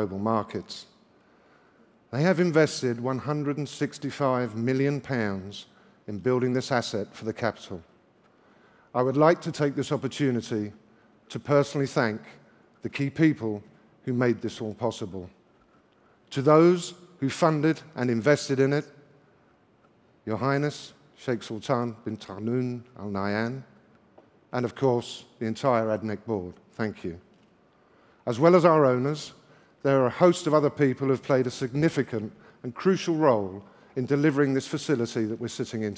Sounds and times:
Male speech, man speaking: 0.0 - 0.9, 2.1 - 7.9, 9.0 - 15.4, 16.3 - 18.9, 20.3 - 23.7, 24.6 - 27.2, 28.3 - 35.9.

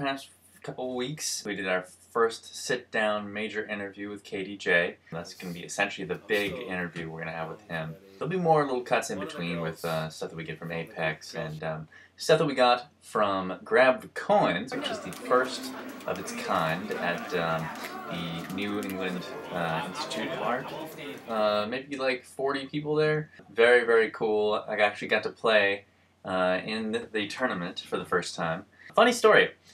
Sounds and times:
Speech: 0.0 - 29.6.

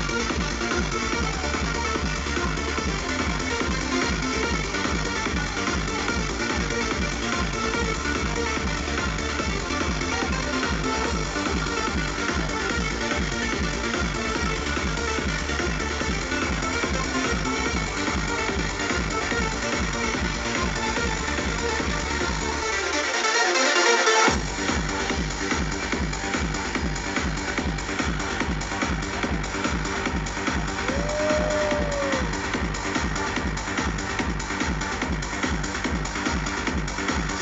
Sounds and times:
Disco: 0.0 - 37.4.

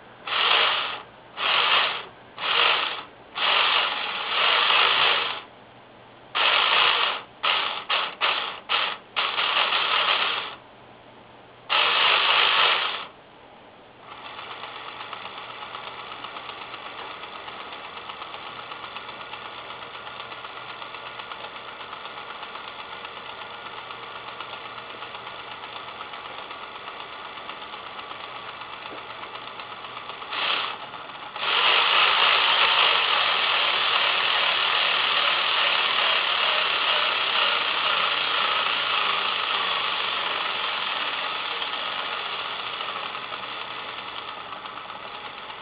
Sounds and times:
Printer: 0.3 - 5.5, 6.4 - 10.6, 11.7 - 13.1, 14.1 - 45.6.

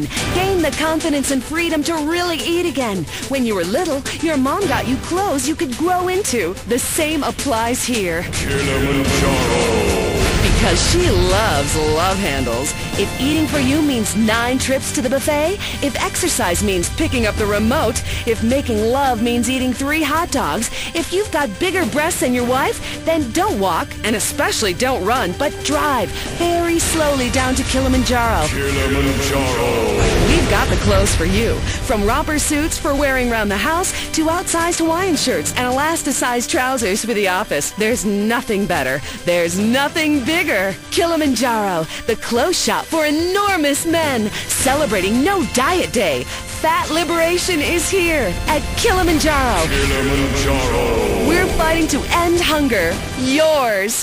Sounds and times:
Music: 0.0 - 54.0
Speech: 0.0 - 54.0.

